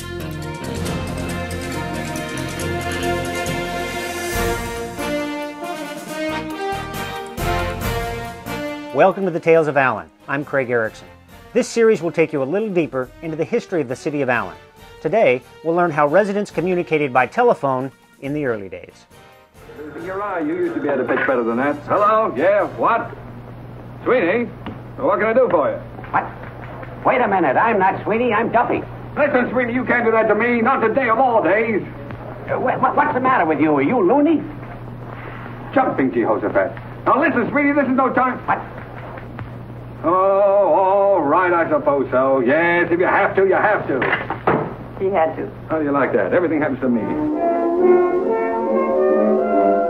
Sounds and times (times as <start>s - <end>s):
Speech: 9.0s - 11.0s, 11.6s - 19.1s, 20.0s - 23.1s, 27.1s - 31.9s, 32.5s - 34.5s, 35.8s - 38.7s, 45.0s - 47.2s.